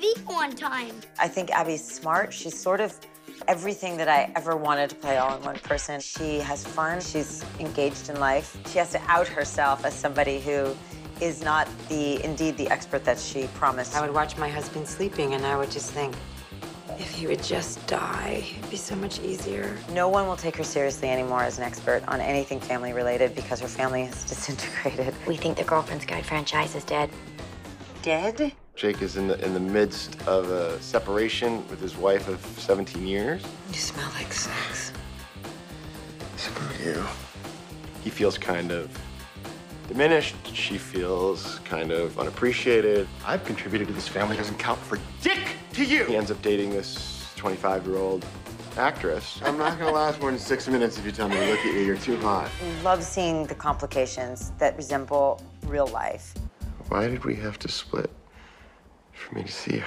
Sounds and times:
Music: 0:00.0 - 0:59.8.

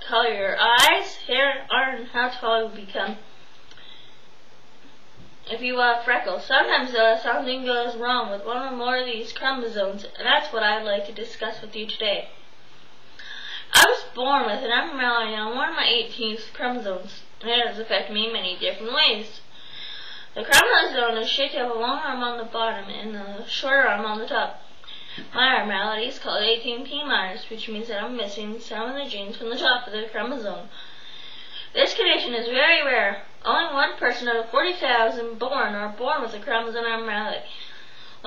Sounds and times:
Female speech, woman speaking: 0:00.0 - 0:03.3, 0:05.5 - 0:12.4, 0:13.7 - 0:19.4, 0:20.4 - 0:24.6, 0:25.3 - 0:30.7, 0:31.7 - 0:37.6
Narration, monologue: 0:00.0 - 0:38.2.

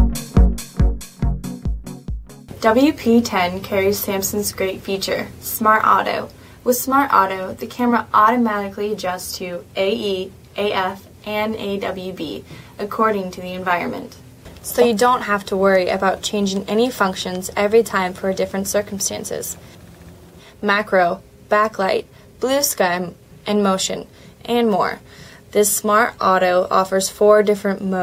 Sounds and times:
Speech: 0:02.6 - 0:19.6, 0:20.6 - 0:28.0.

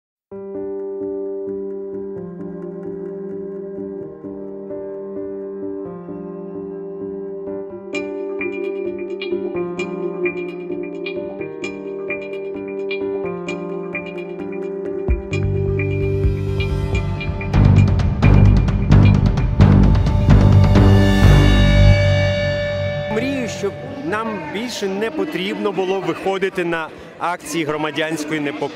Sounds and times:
Music: 0:00.3 - 0:25.9.

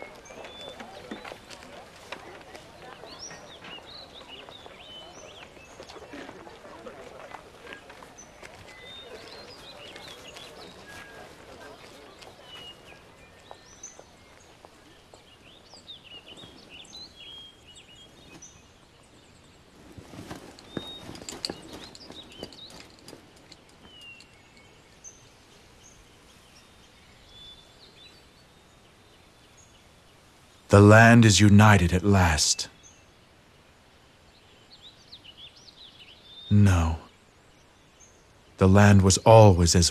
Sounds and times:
Outside, rural or natural: 0:00.0 - 0:39.9.

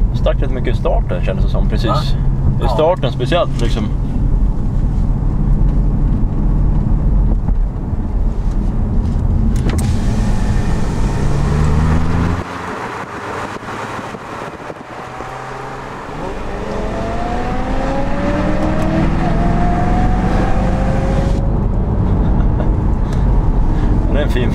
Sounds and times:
Race car, auto racing: 0:00.0 - 0:24.5.

